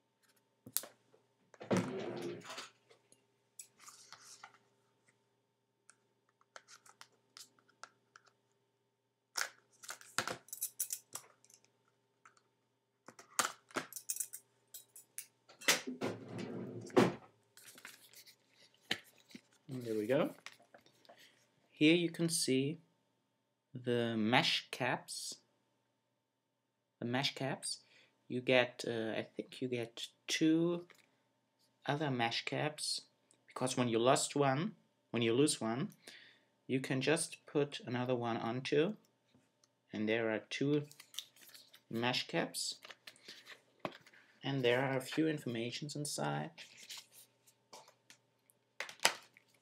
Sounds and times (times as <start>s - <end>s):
Inside, small room: 0.0s - 49.6s
Speech: 19.7s - 20.4s, 21.8s - 22.9s, 23.8s - 25.5s, 27.0s - 30.9s, 31.8s - 36.0s, 36.7s - 39.0s, 39.9s - 41.0s, 41.9s - 42.9s, 44.4s - 46.6s.